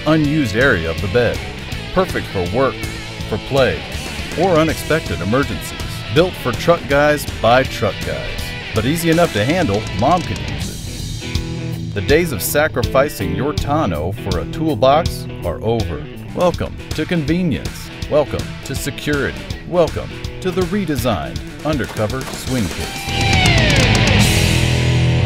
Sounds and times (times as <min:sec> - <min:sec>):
Speech: 0:00.0 - 0:10.8, 0:12.0 - 0:23.0
Music: 0:00.0 - 0:25.2.